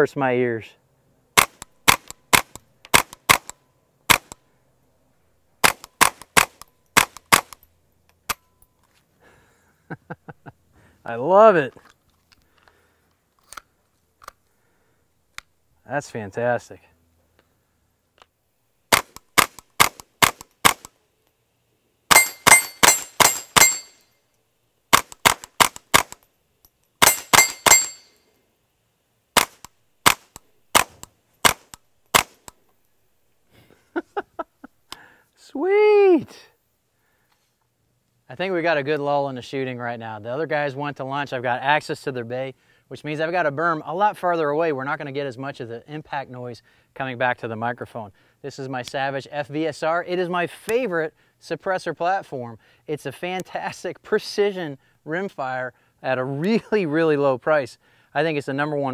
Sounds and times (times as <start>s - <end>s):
Outside, rural or natural: 0.0s - 58.9s
Cap gun: 1.4s - 4.4s, 5.6s - 7.6s, 18.9s - 20.9s, 22.1s - 23.8s, 24.9s - 26.2s, 27.0s - 27.9s, 29.4s - 32.5s.